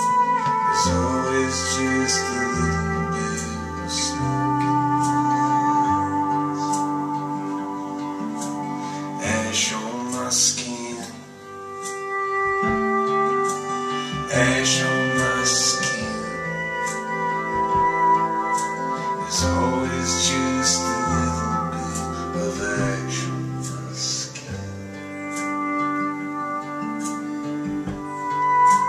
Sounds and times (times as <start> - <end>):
Steel guitar, slide guitar: 0.0 - 28.8.